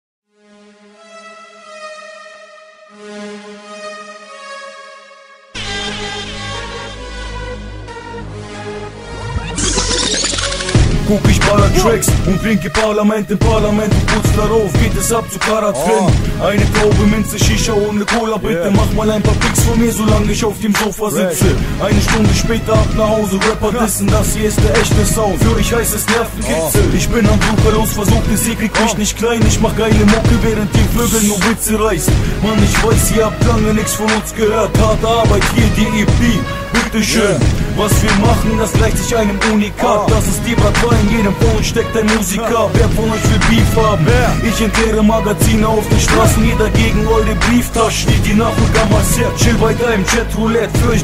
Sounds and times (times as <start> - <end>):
Music: 0.3 - 51.0.